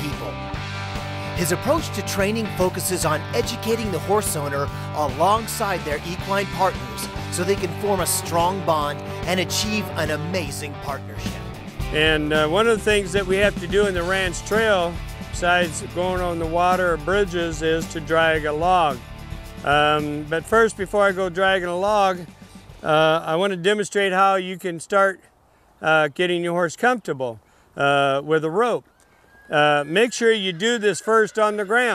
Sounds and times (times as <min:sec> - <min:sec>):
Speech: 0:00.0 - 0:00.4, 0:01.4 - 0:19.0, 0:19.7 - 0:25.2, 0:25.8 - 0:28.8, 0:29.5 - 0:31.9
Music: 0:00.0 - 0:23.3.